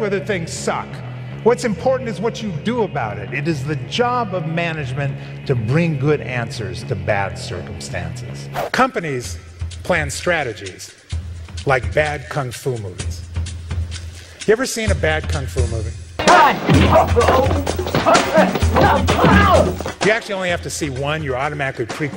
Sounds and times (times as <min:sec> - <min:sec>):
Male speech, man speaking: 0:00.0 - 0:11.0, 0:11.6 - 0:13.2, 0:14.4 - 0:22.1
Music: 0:00.0 - 0:22.1
Narration, monologue: 0:00.0 - 0:22.1.